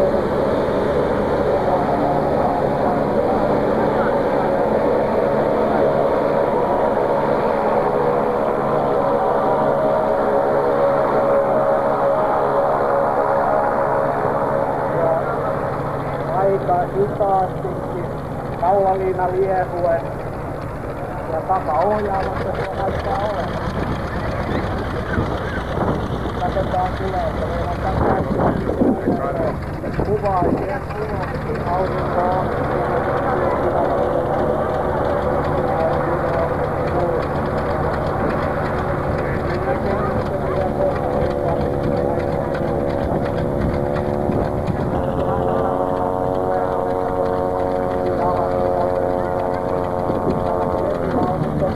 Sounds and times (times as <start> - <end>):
Aircraft engine: 0.0 - 51.7
Fixed-wing aircraft, airplane: 0.0 - 51.7
Speech: 1.5 - 6.0, 14.9 - 20.1, 21.1 - 25.6, 26.3 - 51.7.